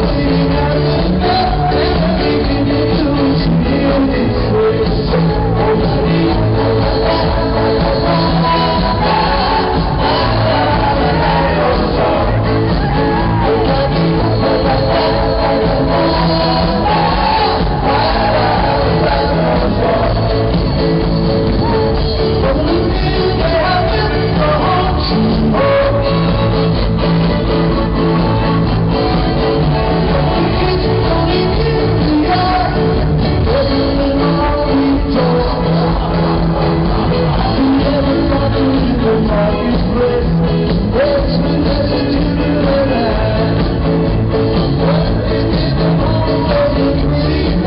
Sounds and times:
Music of Latin America: 0.0 - 47.6.

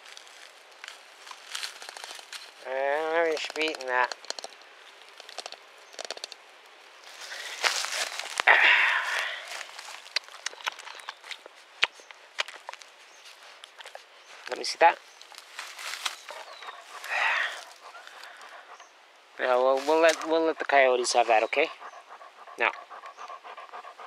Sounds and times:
Speech: 2.6 - 4.1, 14.5 - 15.0, 19.4 - 21.8, 22.6 - 22.8
Dog: 16.2 - 18.9, 19.5 - 24.0.

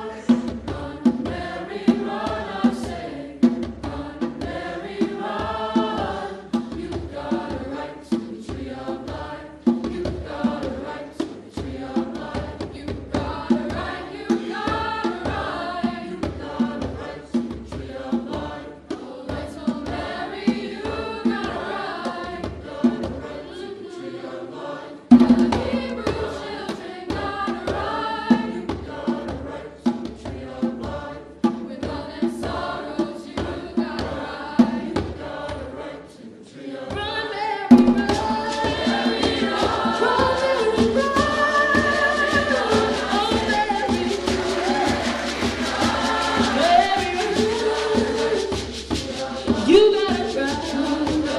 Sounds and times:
Choir: 0.0 - 51.3.

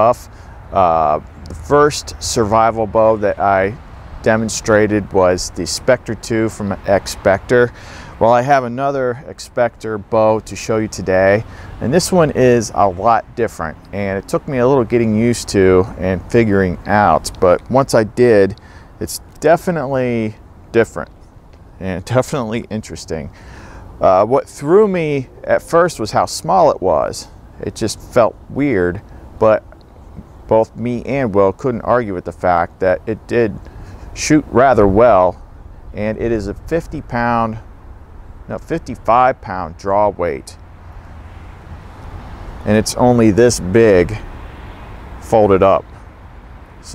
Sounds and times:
Speech: 0.0 - 21.1, 21.8 - 23.3, 24.0 - 35.4, 36.0 - 37.6, 38.5 - 40.6, 42.6 - 44.3, 45.2 - 45.9.

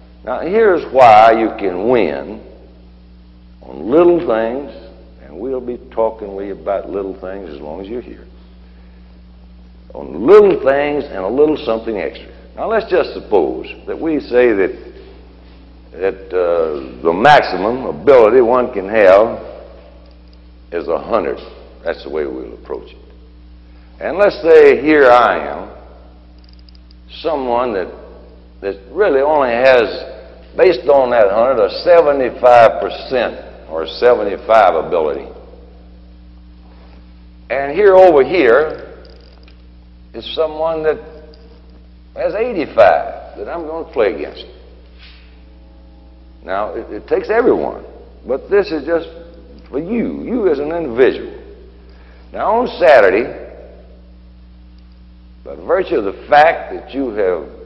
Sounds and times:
Narration, monologue: 0.0 - 57.6
Male speech, man speaking: 0.3 - 2.5, 3.6 - 8.3, 9.9 - 14.9, 16.0 - 19.5, 20.7 - 23.0, 24.0 - 25.8, 27.1 - 28.0, 28.6 - 35.4, 37.5 - 38.9, 40.1 - 41.1, 42.2 - 44.6, 46.4 - 51.4, 52.3 - 53.6, 55.5 - 57.6.

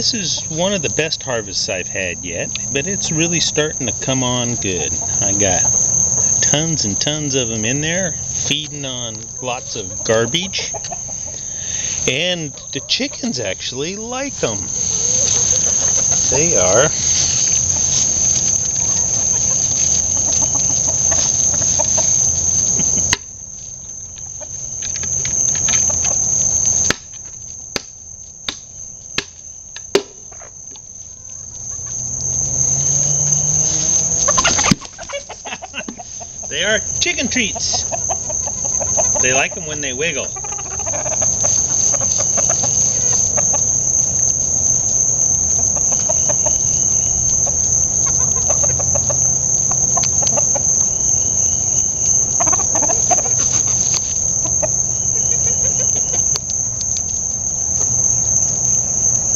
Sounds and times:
Cluck: 0.0 - 0.6, 4.2 - 7.5, 9.5 - 13.3, 20.0 - 22.2, 34.2 - 43.7, 45.6 - 46.8, 48.0 - 50.9, 52.1 - 56.2.

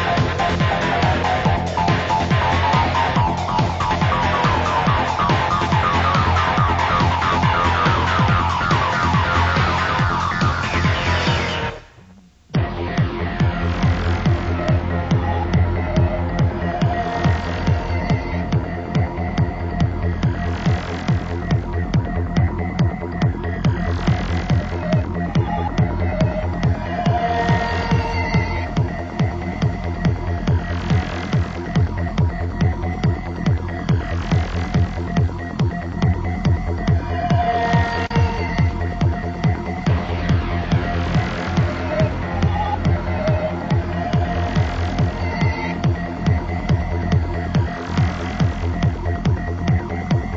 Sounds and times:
Music: 0.0 - 50.3.

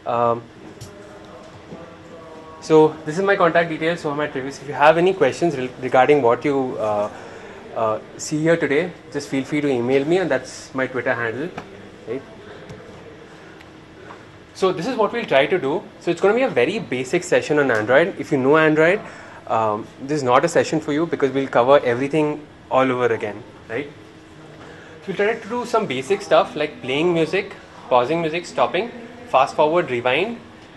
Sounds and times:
Speech: 0.0 - 13.3, 14.6 - 24.0, 25.0 - 30.5.

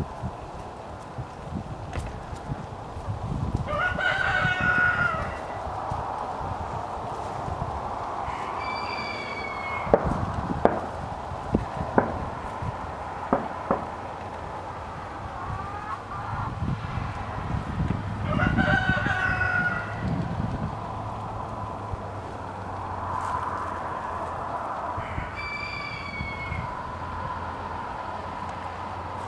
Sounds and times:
Crowing, cock-a-doodle-doo: 3.6 - 5.7, 8.2 - 10.2, 18.2 - 20.4, 23.1 - 28.0.

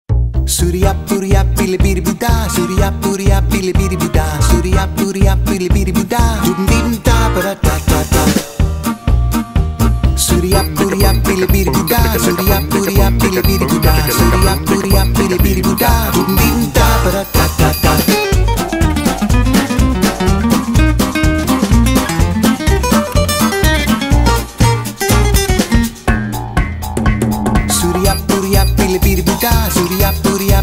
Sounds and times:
Music: 0.1 - 30.6.

